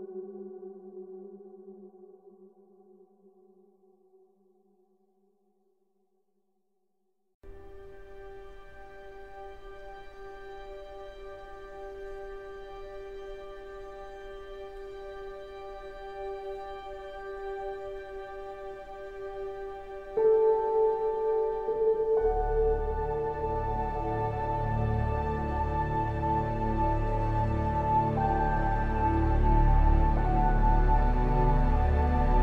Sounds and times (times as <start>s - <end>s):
Sad music: 7.5s - 32.4s
Soundtrack music: 7.5s - 32.4s.